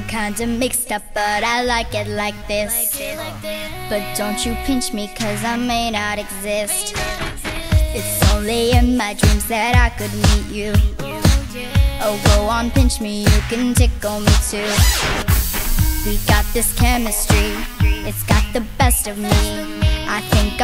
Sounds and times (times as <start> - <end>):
Pop music: 0.0 - 20.6.